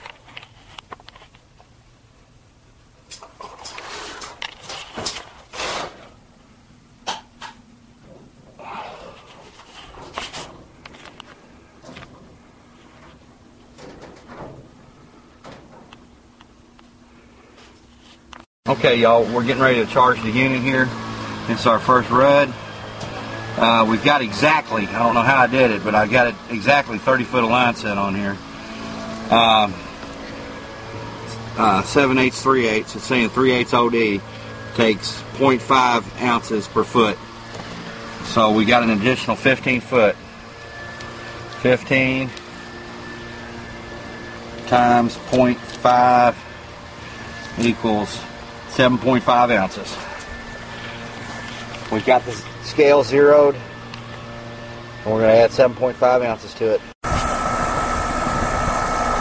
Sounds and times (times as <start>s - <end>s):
Air conditioning: 0.0s - 59.2s
Speech: 18.7s - 22.6s, 23.6s - 28.4s, 29.3s - 29.8s, 31.6s - 37.2s, 38.2s - 40.2s, 41.6s - 42.4s, 44.7s - 46.4s, 47.6s - 50.1s, 51.9s - 53.7s, 55.0s - 56.9s.